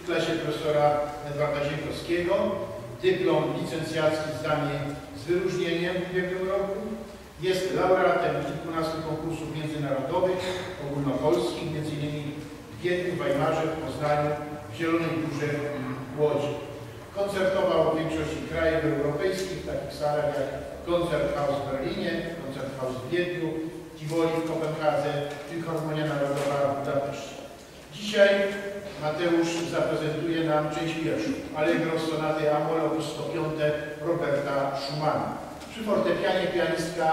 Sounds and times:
Speech: 0.0 - 37.1.

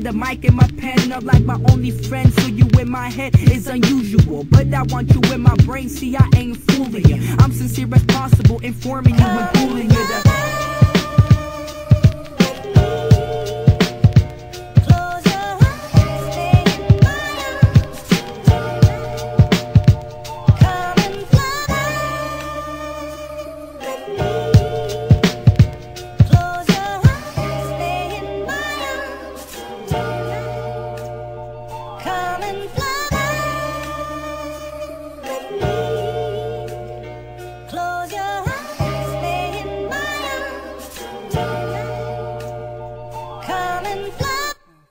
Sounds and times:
Music: 0.0 - 44.9.

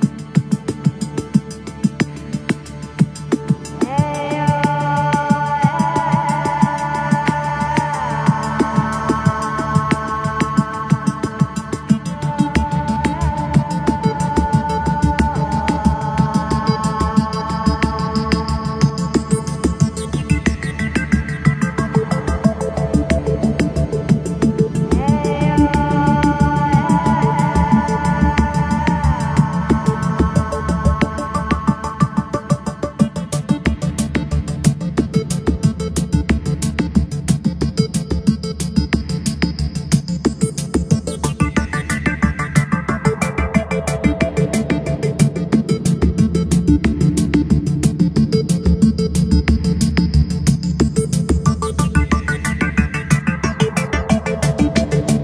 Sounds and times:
Music: 0.0 - 55.2.

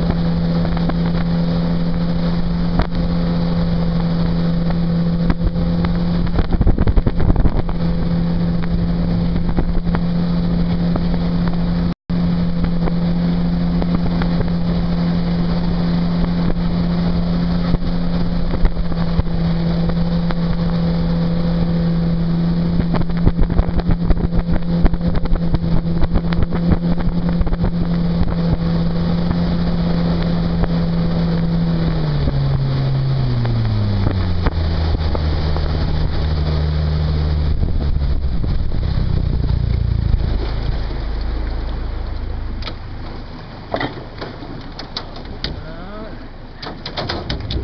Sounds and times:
Motorboat, speedboat: 0.0 - 47.6.

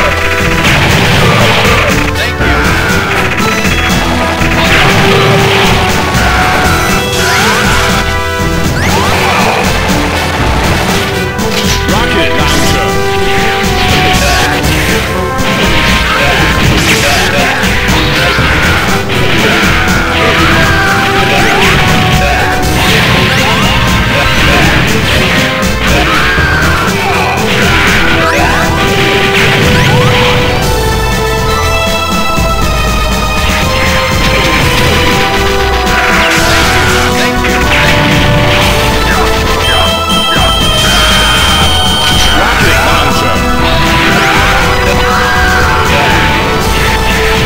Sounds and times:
Music: 0.0 - 47.4
Speech: 1.6 - 2.9, 11.7 - 13.0, 16.1 - 19.6, 21.3 - 25.2, 27.0 - 28.7, 42.4 - 43.5, 44.1 - 46.4.

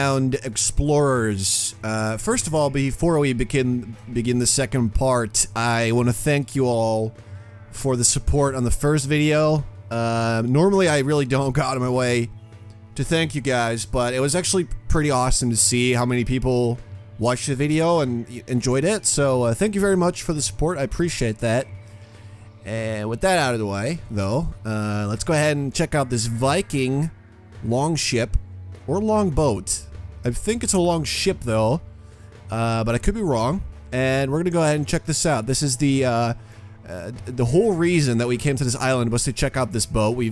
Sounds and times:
Speech: 0.0 - 7.2, 7.8 - 12.3, 13.0 - 21.7, 22.6 - 31.8, 32.5 - 40.3
Music: 0.0 - 40.3.

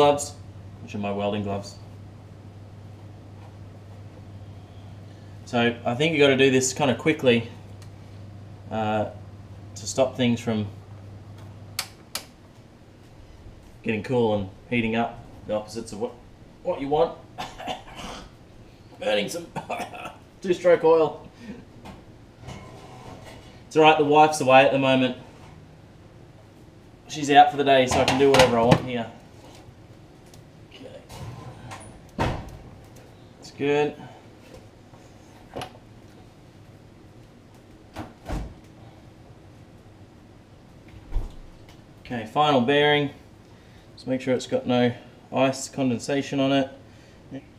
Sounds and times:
Speech: 0.0 - 1.8, 5.5 - 7.6, 8.7 - 9.2, 9.8 - 10.8, 13.8 - 17.2, 19.0 - 19.6, 20.4 - 21.2, 23.7 - 25.2, 27.1 - 29.2, 33.4 - 34.1, 42.1 - 43.2, 44.0 - 47.5.

